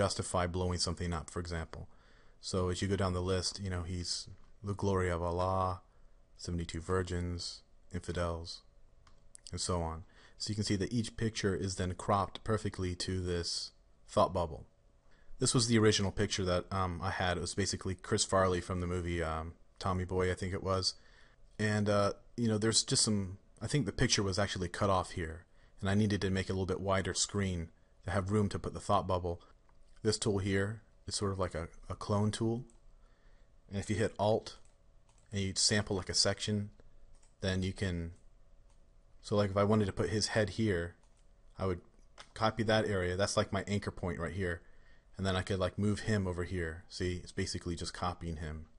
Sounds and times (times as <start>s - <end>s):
Speech: 0.0s - 8.7s, 9.4s - 14.7s, 15.4s - 21.0s, 21.6s - 32.8s, 33.7s - 34.6s, 35.3s - 36.8s, 37.4s - 38.2s, 39.2s - 41.0s, 41.6s - 48.7s.